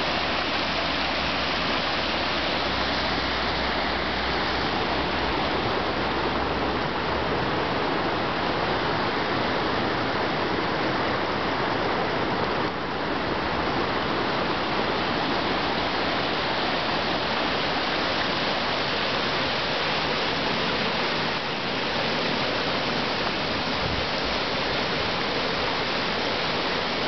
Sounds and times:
Stream: 0:00.0 - 0:27.0
Waterfall: 0:00.0 - 0:27.0.

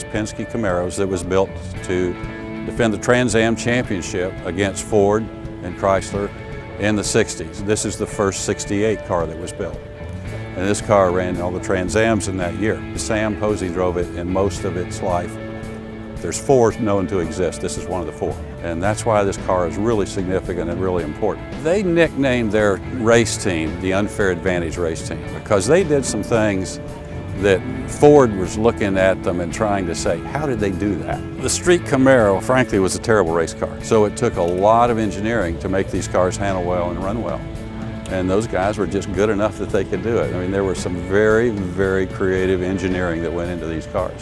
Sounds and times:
Speech: 0:00.0 - 0:09.8, 0:10.6 - 0:15.4, 0:16.2 - 0:26.8, 0:27.4 - 0:37.4, 0:38.1 - 0:44.2
Music: 0:00.0 - 0:44.2.

